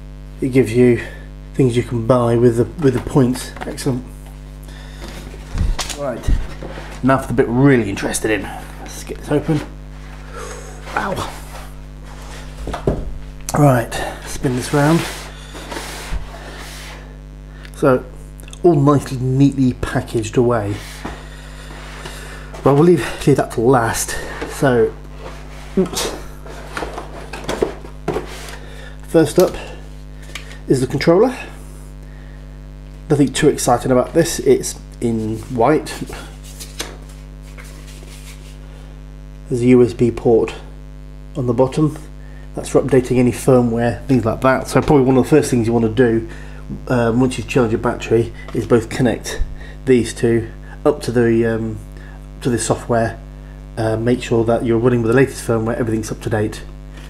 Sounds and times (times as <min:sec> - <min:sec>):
Speech: 0:00.4 - 0:04.1, 0:05.9 - 0:09.8, 0:10.9 - 0:11.4, 0:13.5 - 0:15.2, 0:17.8 - 0:20.9, 0:22.6 - 0:25.0, 0:25.8 - 0:26.2, 0:29.1 - 0:29.8, 0:30.7 - 0:31.6, 0:33.1 - 0:36.3, 0:39.5 - 0:40.8, 0:41.4 - 0:51.8, 0:52.4 - 0:53.2, 0:53.8 - 0:56.7.